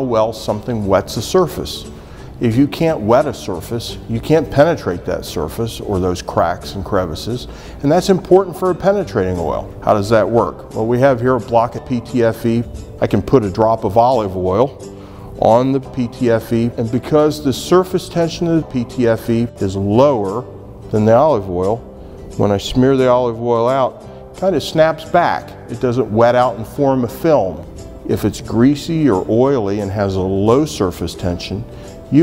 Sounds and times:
Speech: 0:00.0 - 0:14.8, 0:15.4 - 0:21.8, 0:22.4 - 0:32.2
Music: 0:00.0 - 0:32.2.

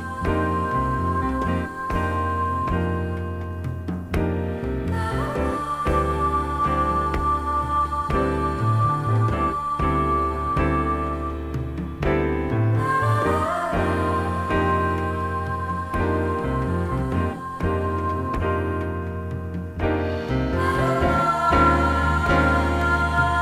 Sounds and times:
Music: 0:00.0 - 0:23.4.

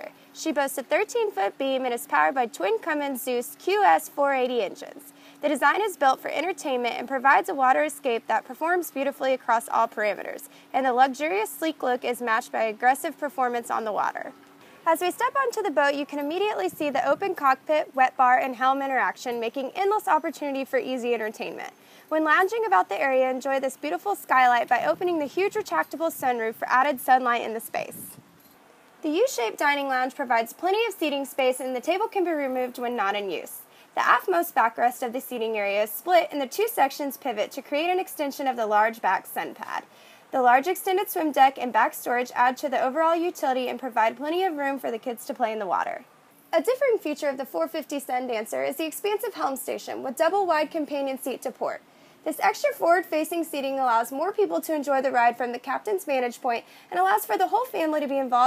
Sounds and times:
Speech: 0:00.0 - 0:28.2, 0:29.0 - 0:46.0, 0:46.6 - 0:58.4.

